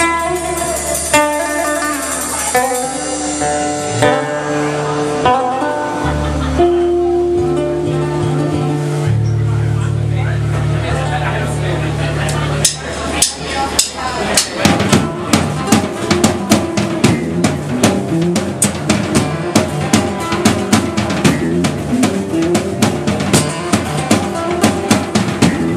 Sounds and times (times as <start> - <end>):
Music: 0.0 - 25.7
Speech: 8.0 - 17.3.